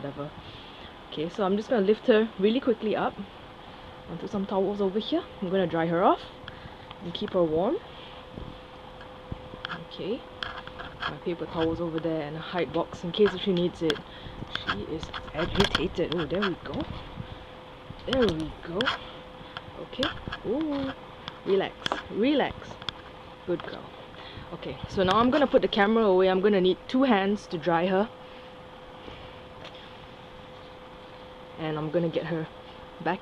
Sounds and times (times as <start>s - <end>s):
Speech: 0.0s - 0.3s, 1.1s - 3.3s, 4.1s - 6.3s, 7.0s - 7.8s, 9.7s - 10.3s, 11.0s - 14.0s, 14.6s - 16.9s, 18.1s - 19.0s, 19.8s - 22.8s, 23.5s - 23.9s, 24.5s - 28.1s, 31.6s - 33.2s.